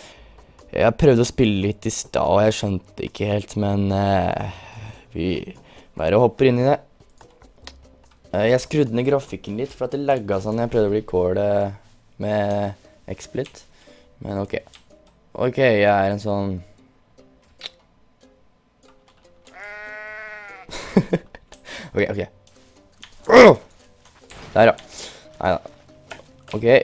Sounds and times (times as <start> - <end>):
Music: 0.0 - 26.8
Speech: 0.7 - 6.8, 8.3 - 13.6, 14.2 - 14.7, 15.4 - 16.7, 22.0 - 22.3, 25.4 - 25.7, 26.5 - 26.8.